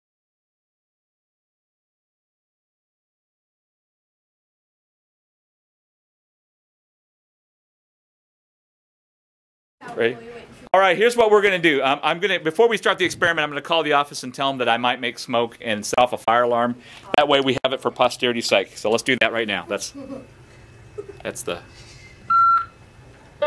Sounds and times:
Speech: 9.8 - 20.0.

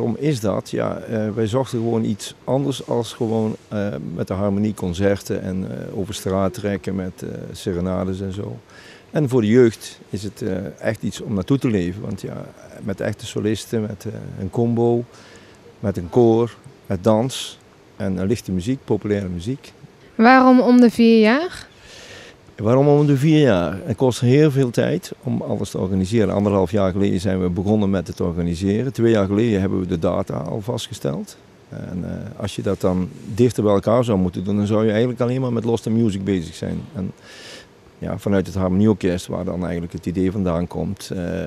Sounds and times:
Speech: 0.0 - 8.6, 9.2 - 15.1, 15.8 - 21.7, 22.6 - 37.2, 38.0 - 41.4.

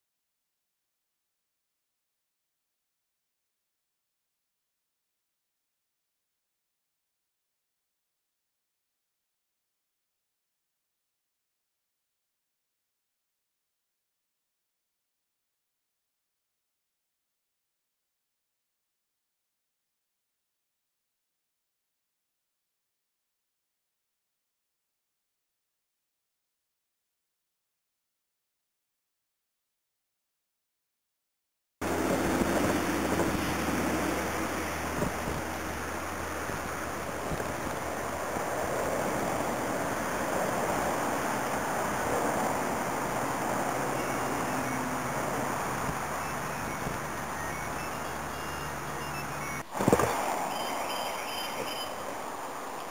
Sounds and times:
Rustling leaves: 31.8 - 52.9.

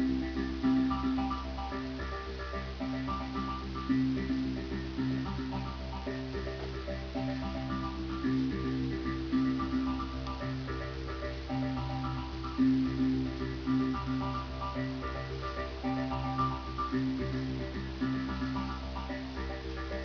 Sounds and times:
Music: 0.0 - 20.0.

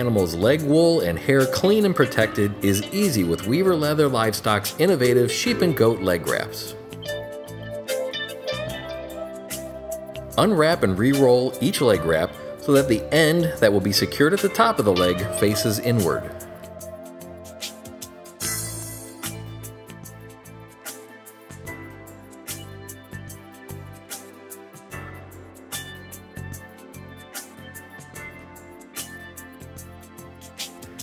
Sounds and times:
Music: 0.0 - 31.0.

